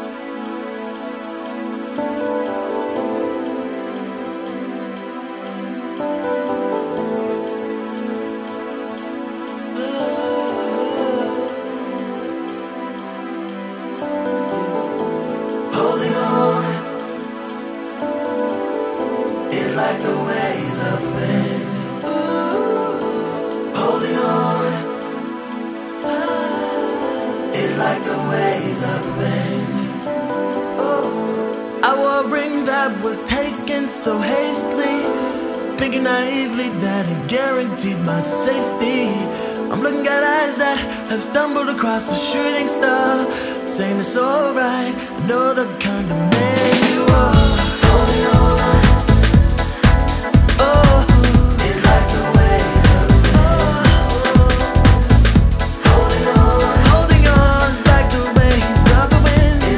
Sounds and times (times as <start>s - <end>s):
Music: 0.0s - 59.7s.